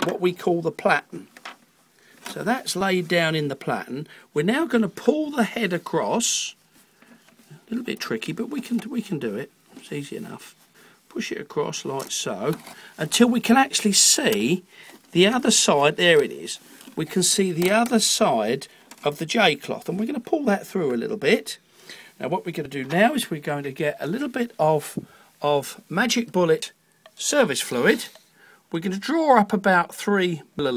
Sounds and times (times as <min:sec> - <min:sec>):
Speech: 0:00.0 - 0:01.3, 0:02.3 - 0:06.6, 0:07.5 - 0:21.6, 0:22.2 - 0:30.7.